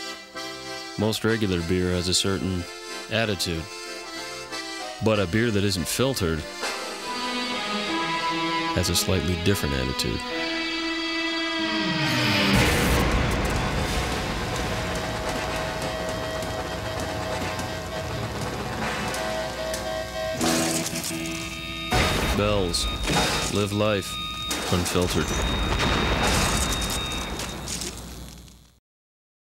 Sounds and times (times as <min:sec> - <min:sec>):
Speech: 0:01.0 - 0:03.7, 0:05.0 - 0:06.5, 0:08.8 - 0:10.2, 0:22.3 - 0:25.4.